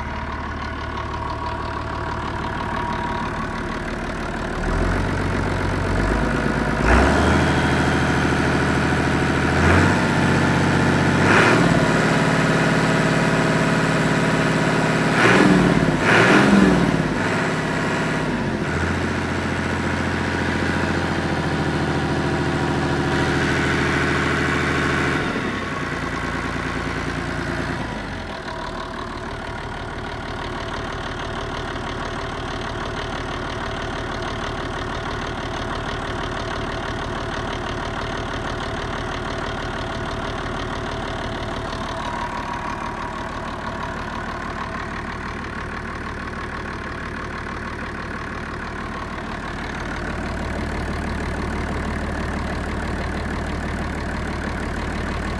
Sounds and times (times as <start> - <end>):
Heavy engine (low frequency): 0.0 - 55.3.